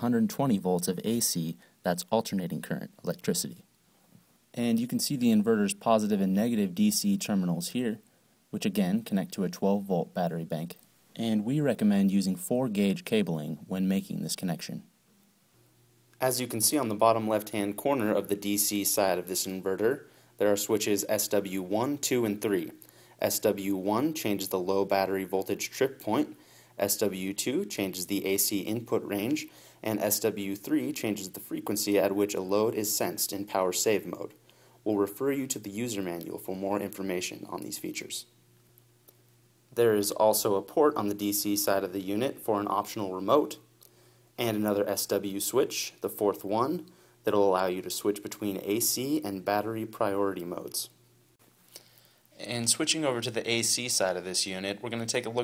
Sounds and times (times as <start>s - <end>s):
Speech: 0.0s - 3.7s, 4.5s - 14.9s, 16.2s - 38.4s, 39.8s - 43.7s, 44.4s - 51.0s, 52.4s - 55.4s.